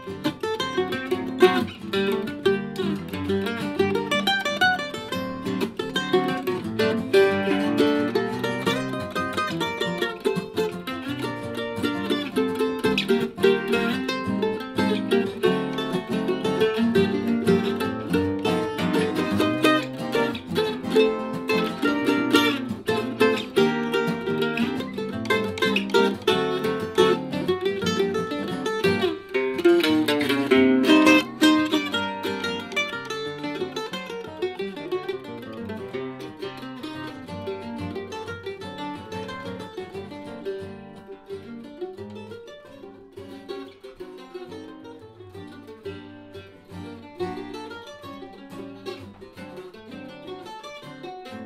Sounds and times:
Plucked string instrument: 0.0s - 51.4s.

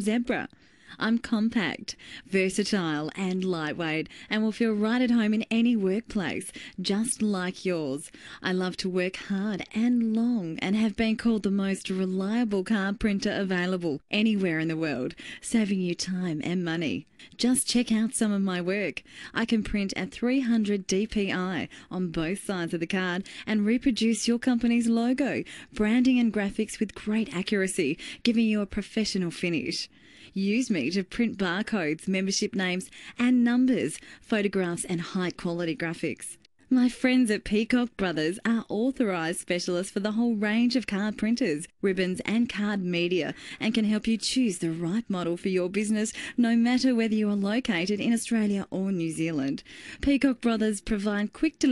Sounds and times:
Speech: 0.0s - 51.7s.

